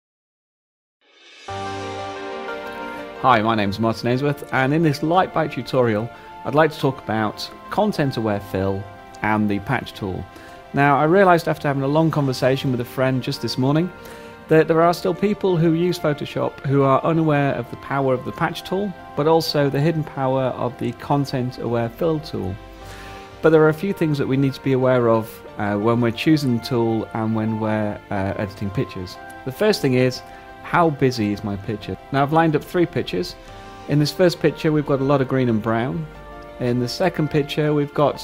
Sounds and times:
Music: 1.0 - 38.2
Speech: 3.2 - 22.6, 23.4 - 38.2.

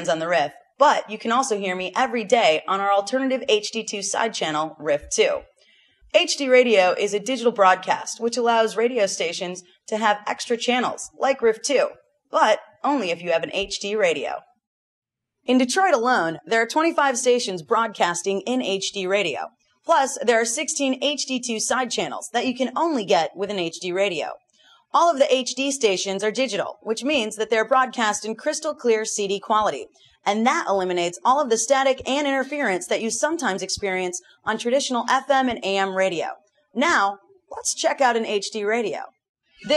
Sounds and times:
Speech: 0.0 - 5.4, 6.2 - 14.4, 15.5 - 24.4, 25.0 - 39.7.

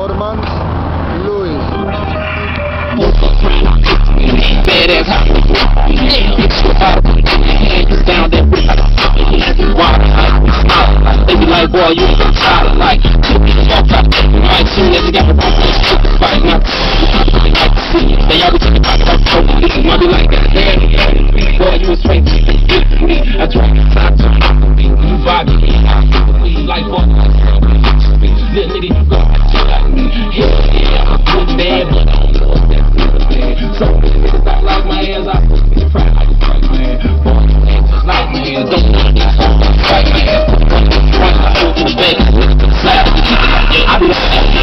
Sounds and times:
Music: 1.5 - 44.6.

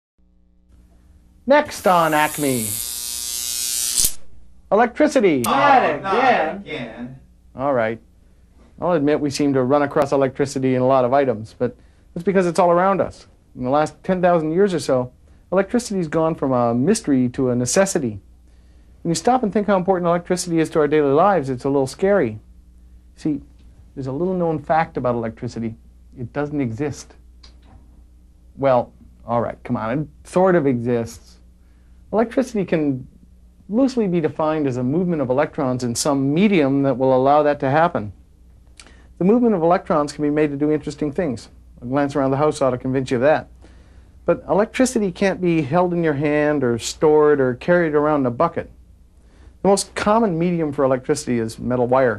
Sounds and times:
Inside, small room: 0.2 - 52.1
Speech: 1.5 - 2.7, 4.7 - 8.0, 8.8 - 18.2, 19.0 - 22.4, 23.2 - 27.2, 28.6 - 31.4, 32.1 - 33.1, 33.7 - 38.2, 39.2 - 43.5, 44.3 - 48.8, 49.6 - 52.1
Electric shaver, electric razor: 1.7 - 4.2.

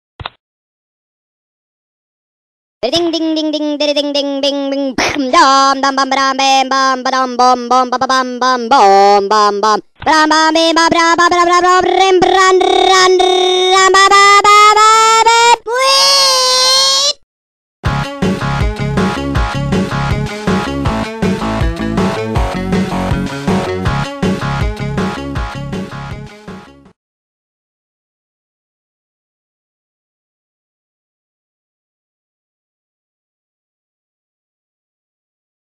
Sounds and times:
Music: 17.8 - 27.0.

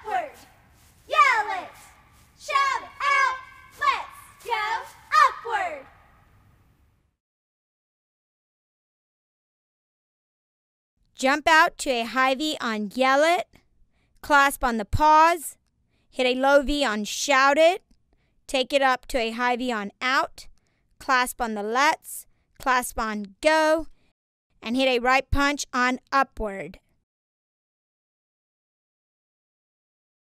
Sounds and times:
Speech: 0.0 - 0.5, 1.1 - 5.9, 11.2 - 13.6, 14.2 - 15.6, 16.2 - 17.8, 18.5 - 23.9, 24.6 - 26.8.

